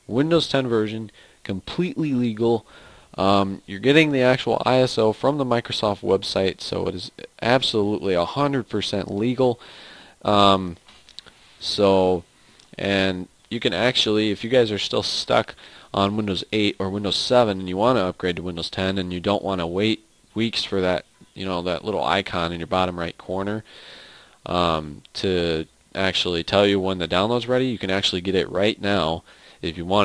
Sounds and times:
Speech: 0:00.0 - 0:09.6, 0:10.2 - 0:10.8, 0:11.6 - 0:23.7, 0:24.4 - 0:30.0.

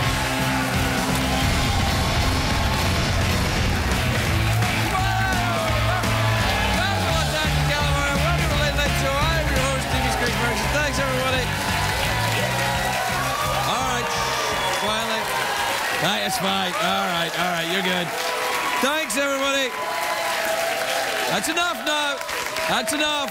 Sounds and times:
Music: 0:00.0 - 0:16.0.

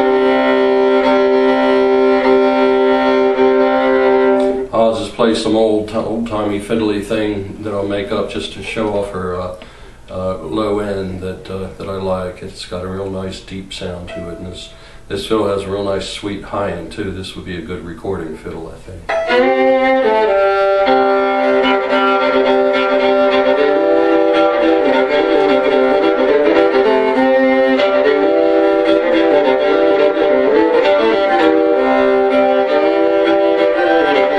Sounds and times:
Violin, fiddle: 0:00.0 - 0:05.2, 0:19.1 - 0:34.3
Speech: 0:04.7 - 0:19.1.

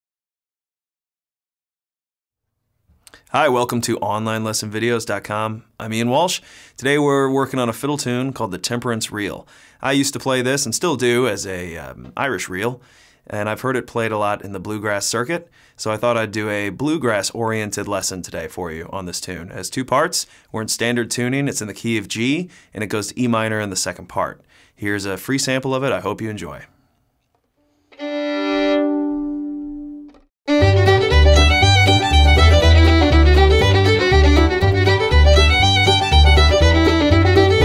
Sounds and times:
Speech: 0:03.2 - 0:26.7
Violin, fiddle: 0:27.9 - 0:29.2, 0:30.5 - 0:37.6
Bluegrass: 0:30.1 - 0:37.6.

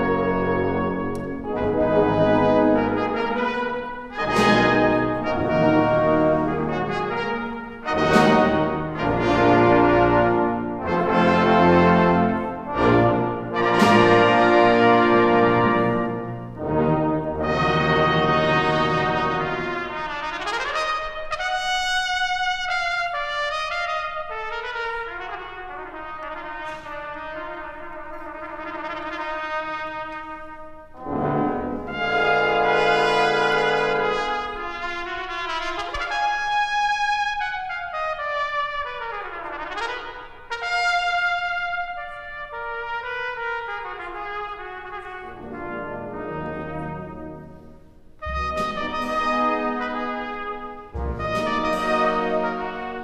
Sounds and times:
Classical music: 0:00.0 - 0:53.0
Orchestra: 0:00.0 - 0:53.0
Trumpet: 0:00.0 - 0:53.0.

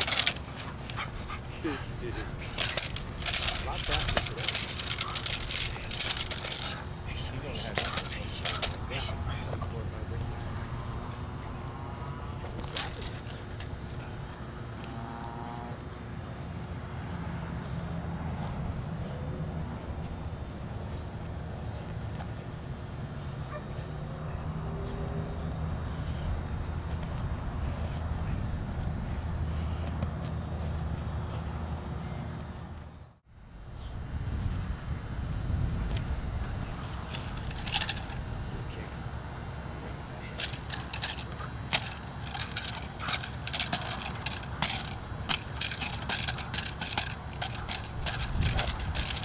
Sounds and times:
Bow-wow: 0:23.5 - 0:23.8.

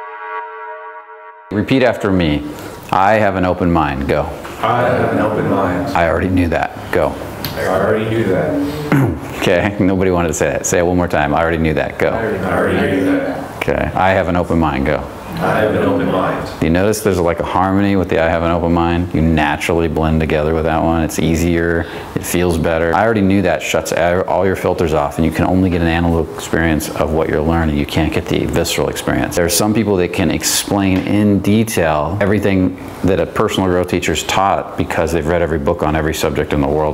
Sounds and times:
Speech: 0:01.5 - 0:08.8, 0:09.4 - 0:36.9.

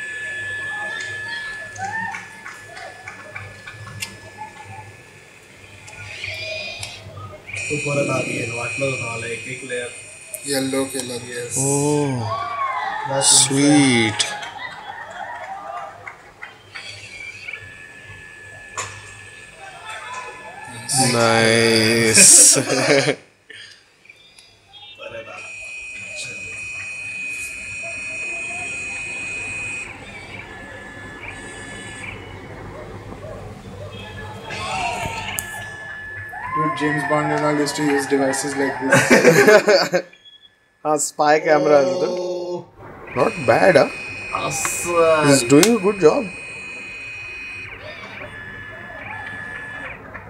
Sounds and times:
Printer: 0:00.0 - 0:12.2, 0:12.9 - 0:23.2, 0:24.8 - 0:40.3, 0:43.1 - 0:50.2.

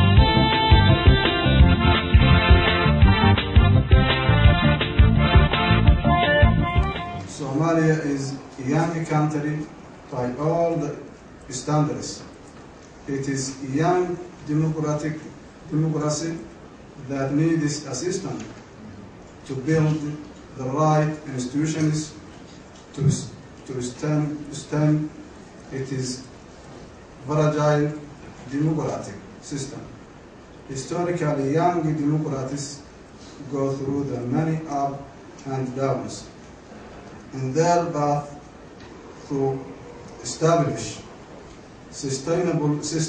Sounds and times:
Male speech, man speaking: 0:07.3 - 0:12.3, 0:13.1 - 0:18.5, 0:19.5 - 0:22.2, 0:23.0 - 0:26.3, 0:27.2 - 0:30.0, 0:30.7 - 0:32.9, 0:33.5 - 0:36.3, 0:37.4 - 0:38.4, 0:39.3 - 0:41.1, 0:42.0 - 0:43.0
Narration, monologue: 0:07.3 - 0:43.0.

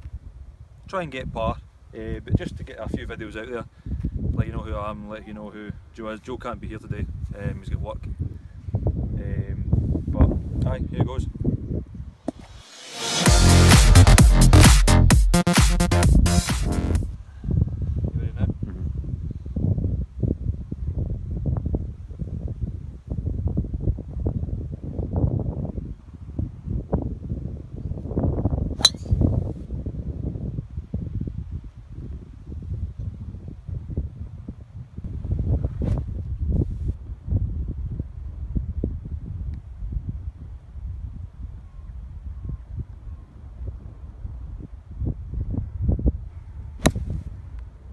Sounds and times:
Wind noise (microphone): 0:00.0 - 0:12.5, 0:17.0 - 0:47.9
Speech: 0:00.9 - 0:03.7, 0:04.4 - 0:08.1, 0:09.2 - 0:11.4, 0:18.1 - 0:18.9.

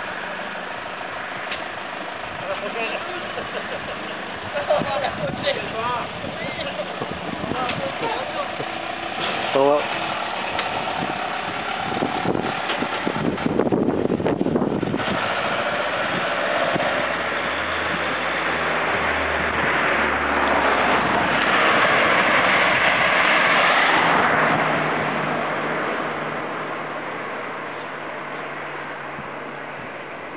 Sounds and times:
Speech: 0:02.4 - 0:03.4, 0:04.6 - 0:08.6, 0:09.5 - 0:09.9.

